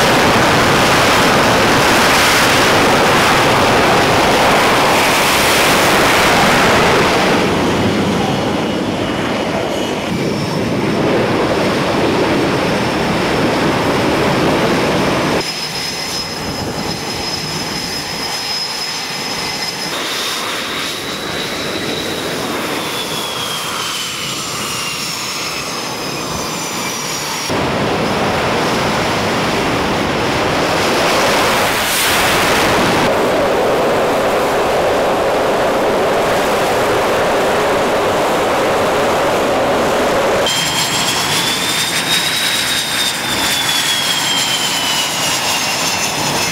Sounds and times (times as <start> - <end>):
Aircraft engine: 0.0 - 46.5
Fixed-wing aircraft, airplane: 0.0 - 46.5.